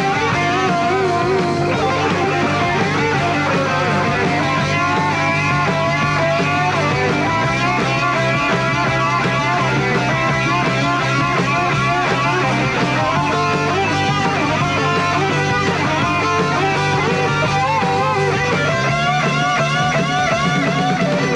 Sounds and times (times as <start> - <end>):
Psychedelic rock: 0.0 - 21.3.